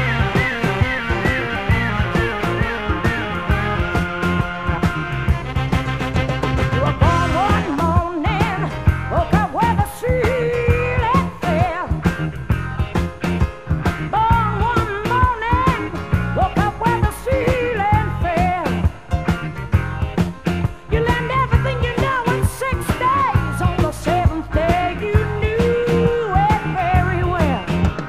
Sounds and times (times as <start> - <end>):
Music: 0.0 - 28.0.